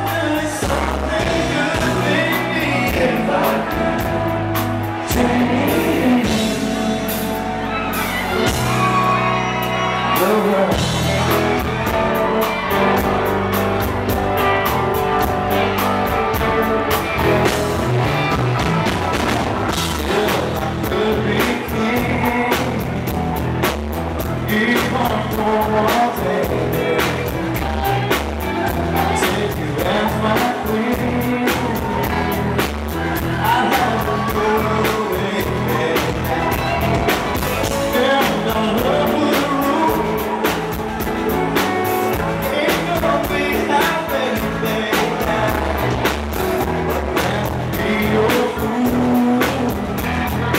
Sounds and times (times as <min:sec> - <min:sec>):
Male singing: 0:00.0 - 0:07.5, 0:10.0 - 0:13.1, 0:19.9 - 0:23.4, 0:24.2 - 0:40.6, 0:42.1 - 0:50.5
Music: 0:00.0 - 0:50.5.